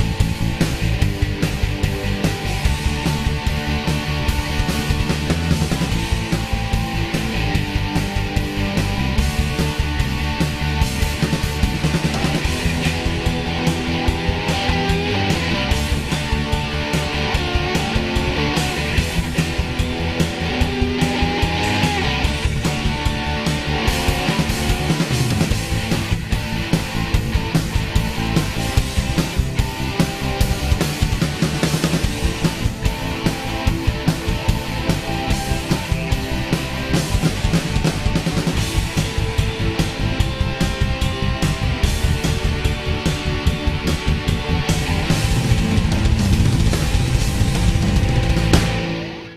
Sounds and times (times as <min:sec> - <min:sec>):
Music: 0:00.0 - 0:49.3.